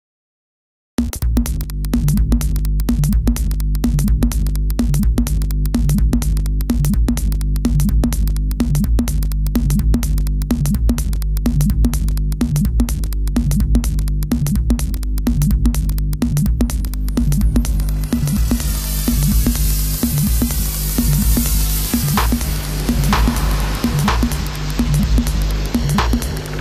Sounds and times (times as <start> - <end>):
Drum machine: 1.0 - 26.6.